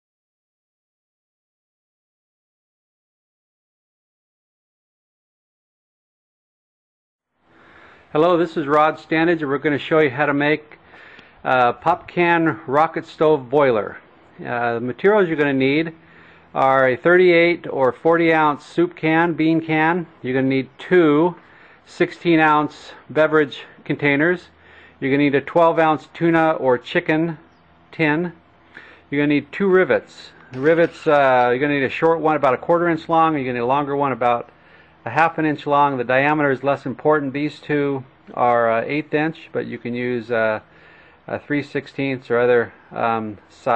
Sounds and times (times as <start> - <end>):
Speech: 8.1 - 10.8, 11.5 - 16.0, 16.6 - 28.4, 29.1 - 34.5, 35.1 - 40.6, 41.3 - 43.7.